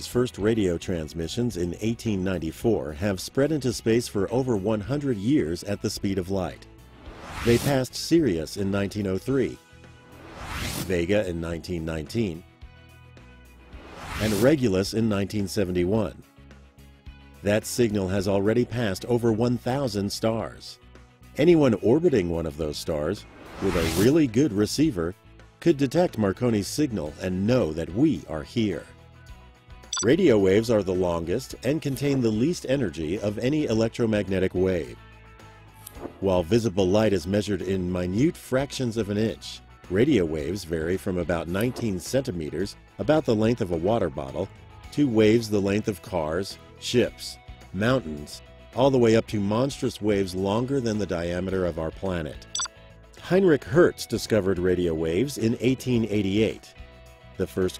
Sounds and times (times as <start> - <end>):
Speech: 0.0 - 6.6, 7.4 - 9.6, 10.8 - 12.4, 14.2 - 16.2, 17.4 - 20.8, 21.4 - 28.9, 30.0 - 35.0, 36.2 - 52.5, 53.2 - 56.7, 57.4 - 57.7
Music: 0.0 - 57.7.